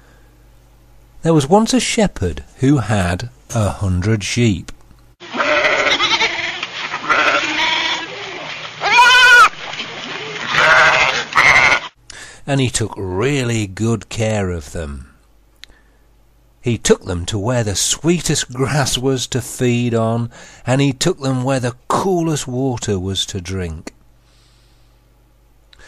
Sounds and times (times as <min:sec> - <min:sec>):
Speech: 0:01.2 - 0:04.8, 0:12.5 - 0:15.2, 0:16.6 - 0:24.0.